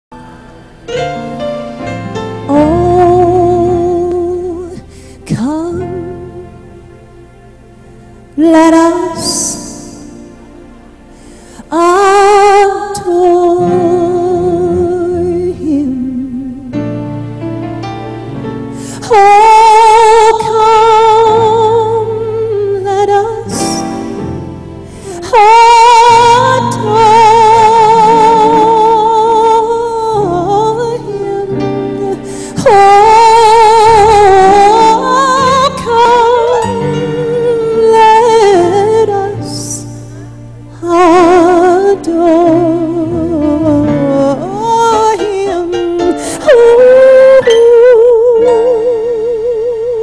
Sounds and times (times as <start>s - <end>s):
Christian music: 0.0s - 50.0s
Tender music: 0.1s - 50.0s.